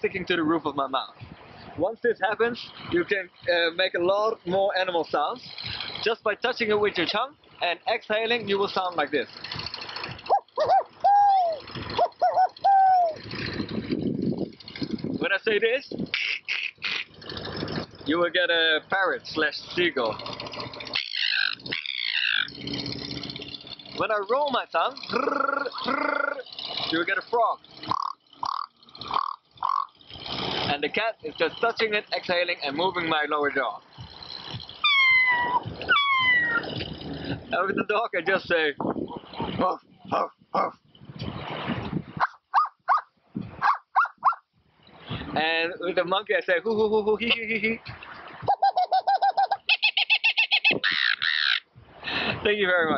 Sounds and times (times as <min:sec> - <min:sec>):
Speech: 0:00.0 - 0:01.2, 0:01.8 - 0:09.3, 0:15.2 - 0:16.0, 0:18.1 - 0:20.2, 0:24.0 - 0:27.6, 0:30.7 - 0:33.8, 0:37.5 - 0:38.8, 0:45.4 - 0:47.8, 0:52.4 - 0:52.9
Outside, rural or natural: 0:00.0 - 0:52.9.